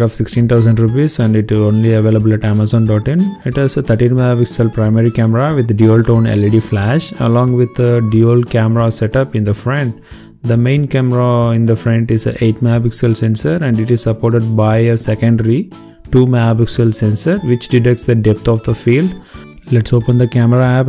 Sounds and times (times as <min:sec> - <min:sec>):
Music: 0:00.0 - 0:20.8
Speech: 0:00.0 - 0:20.8.